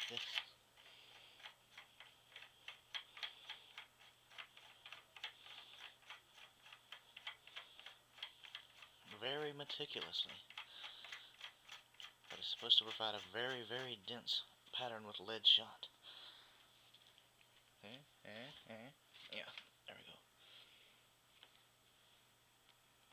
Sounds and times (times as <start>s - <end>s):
Speech: 0.0s - 0.5s, 9.1s - 10.4s, 12.3s - 15.9s, 17.8s - 20.3s.